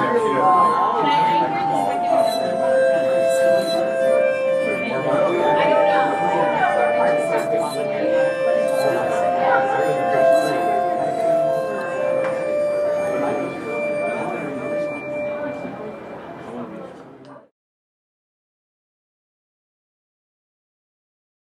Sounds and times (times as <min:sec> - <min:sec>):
Speech: 0:00.0 - 0:03.9, 0:04.6 - 0:17.5
Music: 0:00.0 - 0:16.6.